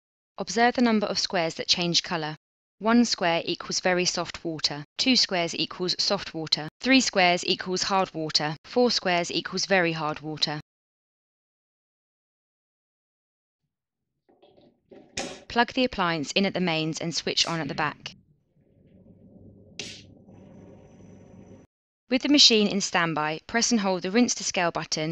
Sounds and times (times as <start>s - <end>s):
Speech: 0.4s - 10.6s, 15.5s - 18.2s, 22.1s - 25.1s.